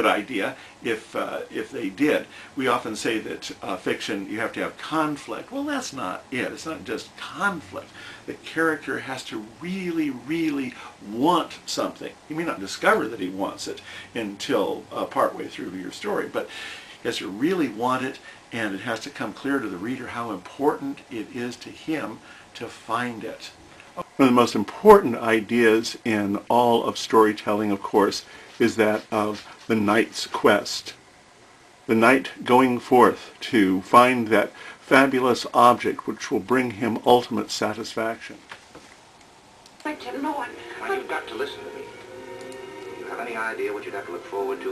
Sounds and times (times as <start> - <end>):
Speech: 0.0 - 31.0, 31.9 - 38.4, 43.1 - 44.7.